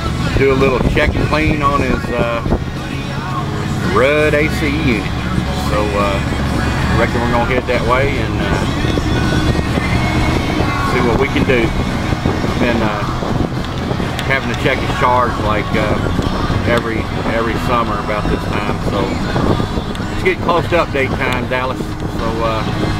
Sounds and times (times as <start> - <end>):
Music: 0.0 - 22.9
Outside, rural or natural: 0.0 - 22.9
Speech: 0.2 - 2.5, 3.8 - 8.8, 10.8 - 11.7, 12.6 - 13.1, 14.2 - 19.2, 20.2 - 22.7.